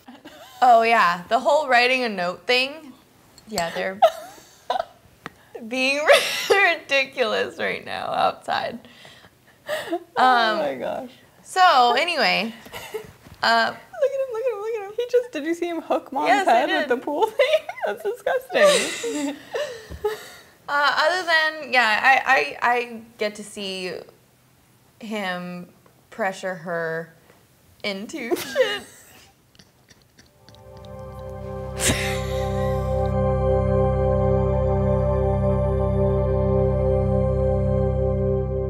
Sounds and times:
Inside, small room: 0:00.0 - 0:38.7
Music: 0:30.4 - 0:38.7.

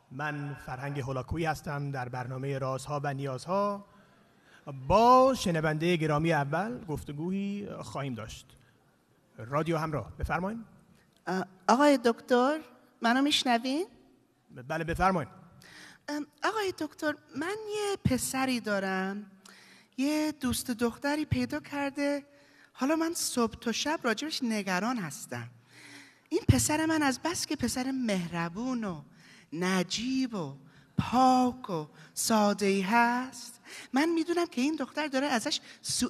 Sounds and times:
Speech: 0:04.7 - 0:08.4, 0:11.3 - 0:13.9, 0:16.1 - 0:19.3, 0:26.4 - 0:29.0.

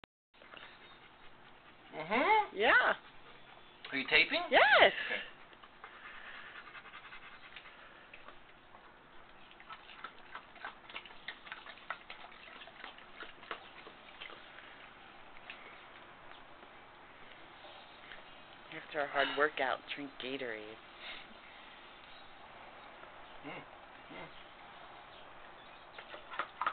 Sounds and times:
Dog: 0:00.5 - 0:04.0, 0:05.1 - 0:08.4.

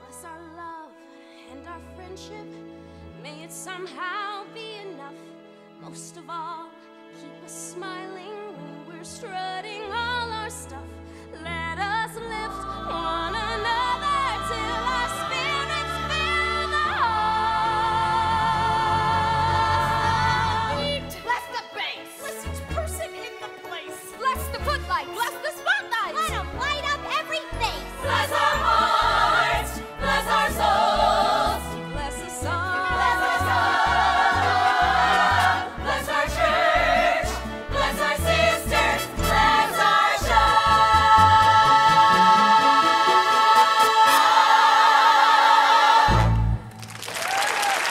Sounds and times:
Choir: 0:11.7 - 0:21.6, 0:28.0 - 0:46.7.

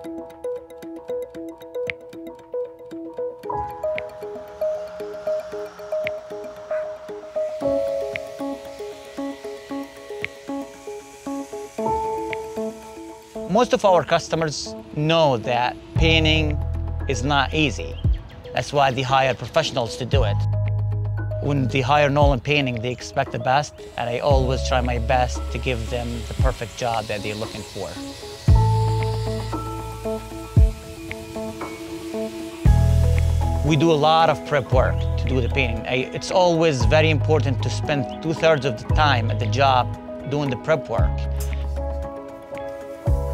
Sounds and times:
Music: 0:00.0 - 0:43.3
Speech: 0:13.5 - 0:18.0, 0:18.6 - 0:20.4, 0:21.4 - 0:28.0, 0:33.6 - 0:41.3.

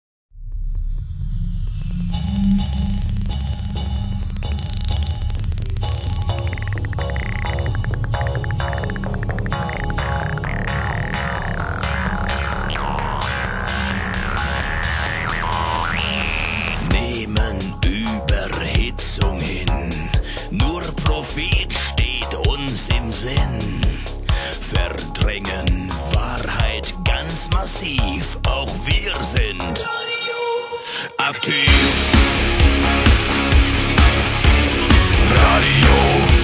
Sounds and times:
Music: 0:00.4 - 0:36.4.

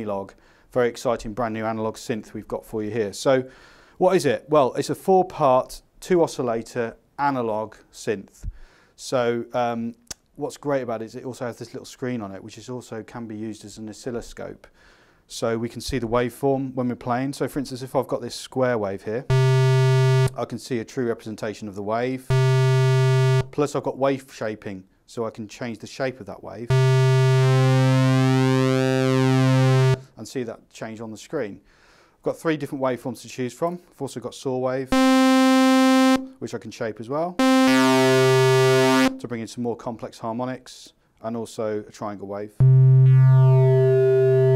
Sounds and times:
Speech: 0:00.0 - 0:14.7, 0:15.3 - 0:19.3, 0:20.4 - 0:22.3, 0:23.5 - 0:26.7, 0:30.1 - 0:35.0, 0:36.4 - 0:37.4, 0:39.2 - 0:42.6
Sampler: 0:19.3 - 0:20.4, 0:22.3 - 0:23.6, 0:26.7 - 0:30.1, 0:34.9 - 0:36.3, 0:37.4 - 0:39.2, 0:42.6 - 0:44.5.

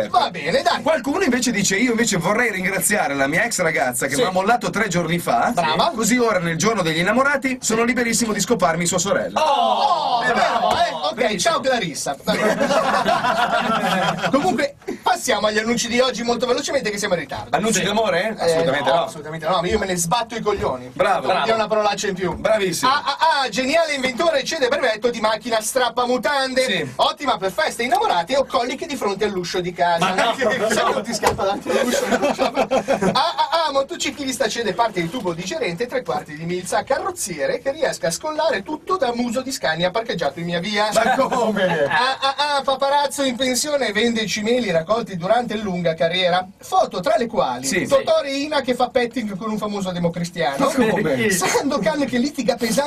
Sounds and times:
Speech: 0:00.0 - 0:13.0, 0:13.7 - 0:52.8.

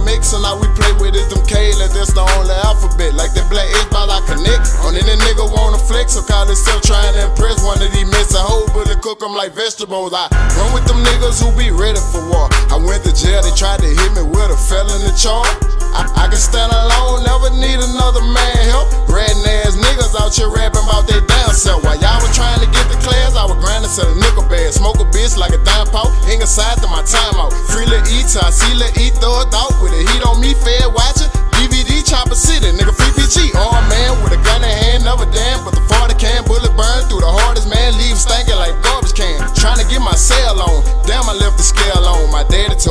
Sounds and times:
Music: 0:00.0 - 0:42.9.

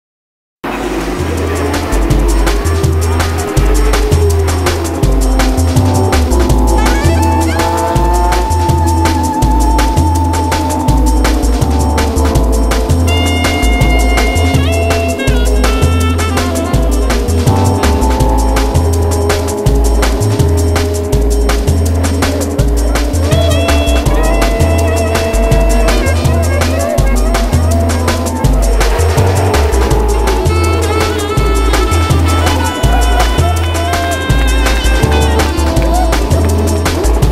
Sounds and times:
Music: 0:00.7 - 0:37.3
Vehicle: 0:00.7 - 0:37.3.

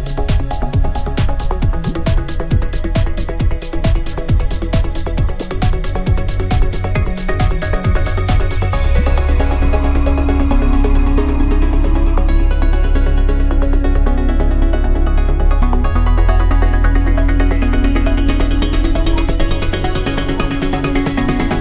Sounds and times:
Music: 0:00.0 - 0:21.6.

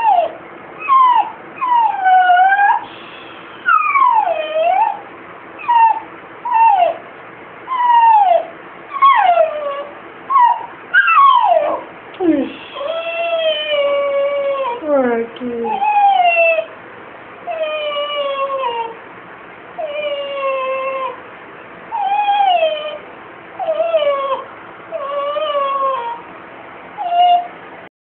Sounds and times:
Domestic animals, pets: 0:00.0 - 0:07.1, 0:07.7 - 0:16.8, 0:17.4 - 0:19.1, 0:19.7 - 0:21.2, 0:21.9 - 0:27.6.

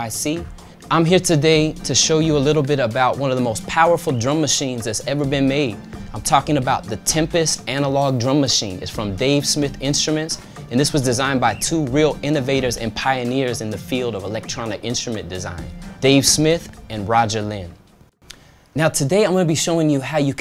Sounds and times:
Speech: 0:00.0 - 0:17.8, 0:18.8 - 0:20.4
Music: 0:00.0 - 0:20.4.

